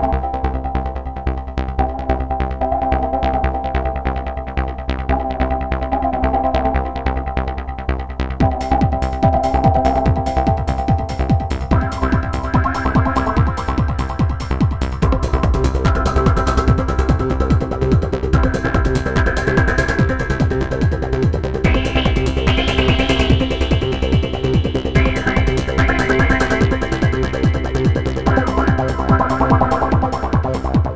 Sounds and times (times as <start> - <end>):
Music: 0.0 - 30.9.